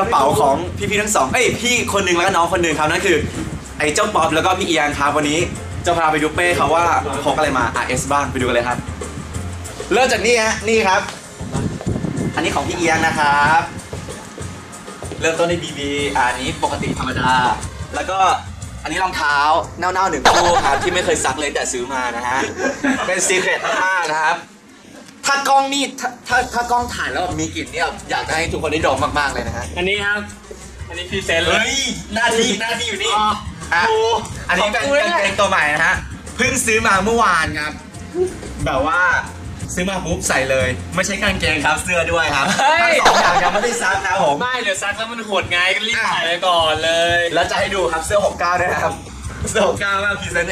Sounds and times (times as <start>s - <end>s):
Speech: 0.0s - 8.8s, 12.4s - 13.7s, 15.2s - 24.5s, 25.2s - 30.3s, 30.9s - 37.8s, 38.6s - 50.5s.